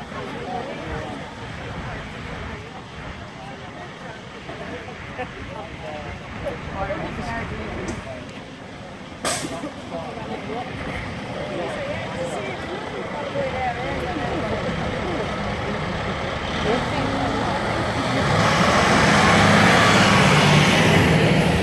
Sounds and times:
Speech: 0:00.0 - 0:19.0
Heavy engine (low frequency): 0:00.0 - 0:21.6
Truck: 0:00.0 - 0:21.6
Accelerating, revving, vroom: 0:16.4 - 0:21.6.

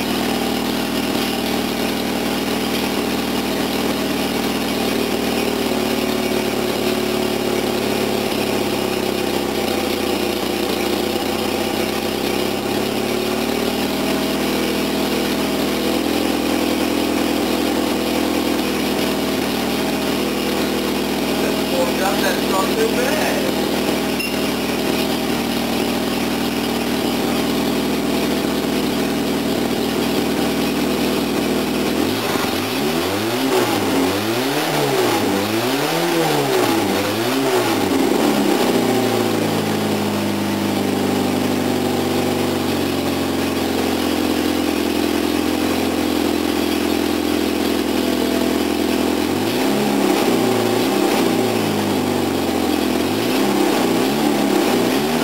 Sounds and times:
Car: 0:00.0 - 0:55.2
Accelerating, revving, vroom: 0:32.0 - 0:39.7, 0:48.5 - 0:55.2.

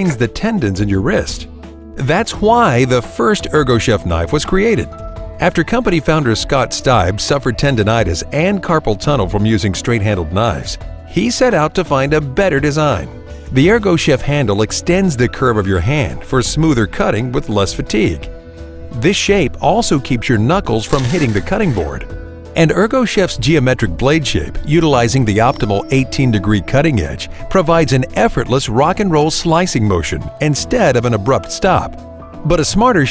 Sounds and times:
Speech: 0:00.0 - 0:18.3, 0:19.0 - 0:33.1
Music: 0:00.0 - 0:33.1.

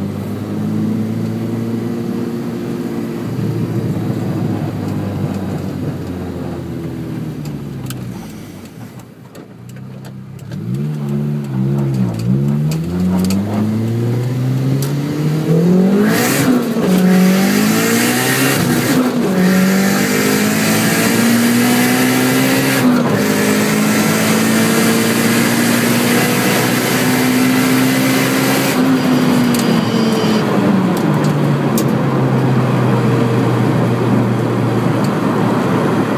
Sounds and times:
Car: 0:00.0 - 0:36.1.

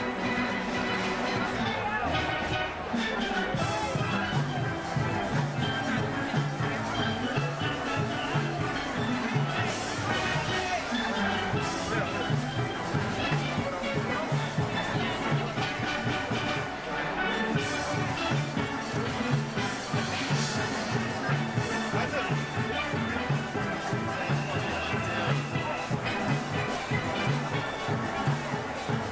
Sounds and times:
Drum: 0:00.0 - 0:29.1
Speech: 0:00.0 - 0:29.1.

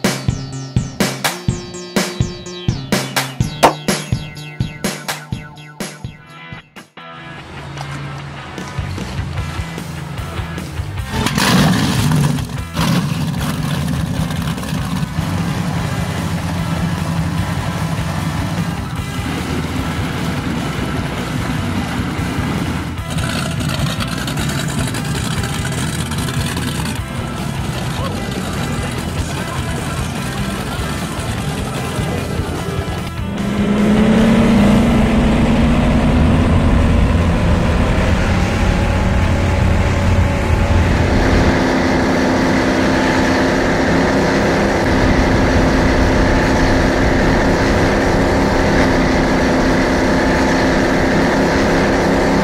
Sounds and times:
Motorboat, speedboat: 0:07.4 - 0:52.4.

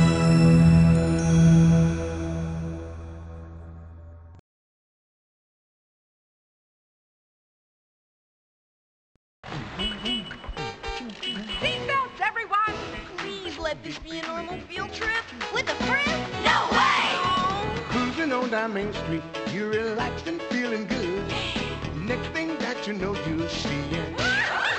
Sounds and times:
Music: 0:00.0 - 0:04.4, 0:09.6 - 0:24.7
Speech: 0:11.7 - 0:16.2.

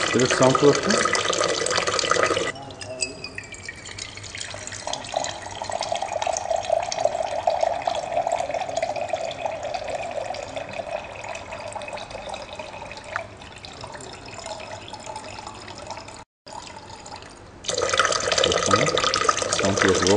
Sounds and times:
Water: 0:00.0 - 0:20.1.

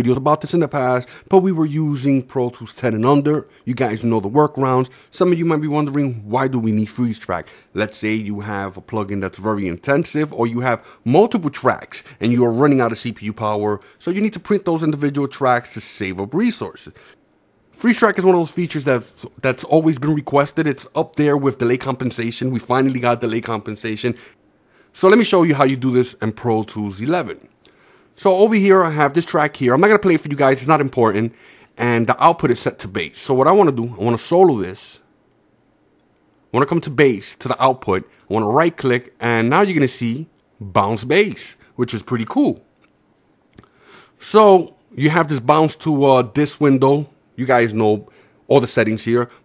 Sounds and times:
Speech: 0:00.0 - 0:17.0, 0:17.8 - 0:24.2, 0:25.0 - 0:27.5, 0:28.2 - 0:35.1, 0:36.5 - 0:42.7, 0:44.2 - 0:49.4.

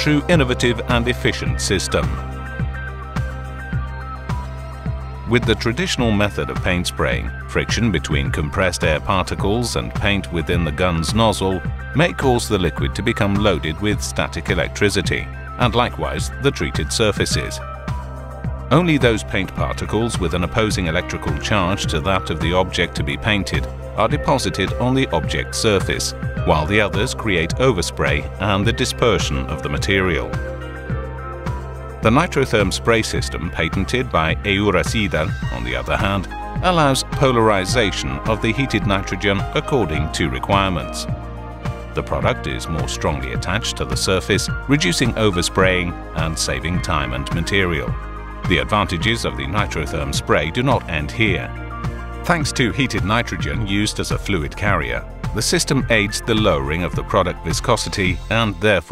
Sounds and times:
Speech: 0:00.0 - 0:02.2, 0:05.3 - 0:17.6, 0:18.7 - 0:30.4, 0:32.0 - 0:41.1, 0:42.0 - 0:51.5, 0:52.2 - 0:58.9
Music: 0:00.0 - 0:58.9.

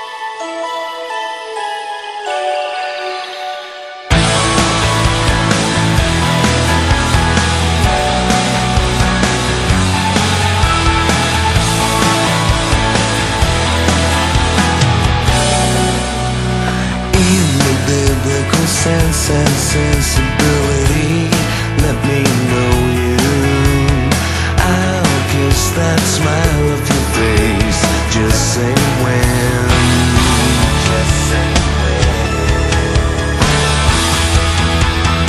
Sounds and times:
Music: 0:00.0 - 0:35.2.

